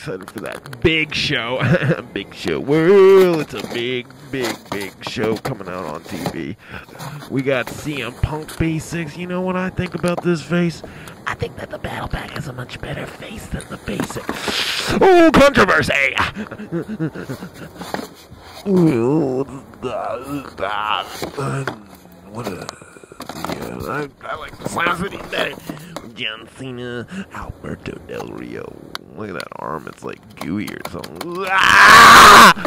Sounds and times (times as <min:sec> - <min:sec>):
Speech: 0:00.0 - 0:16.4, 0:18.7 - 0:22.8, 0:23.5 - 0:31.7.